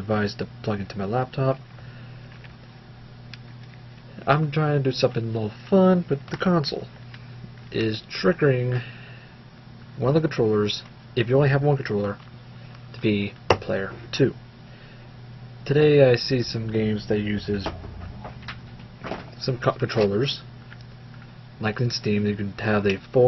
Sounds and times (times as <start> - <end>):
Speech: 0.0 - 1.6, 4.1 - 6.9, 7.7 - 8.9, 10.0 - 12.2, 13.0 - 14.4, 15.6 - 17.8, 19.4 - 20.5, 21.6 - 23.2.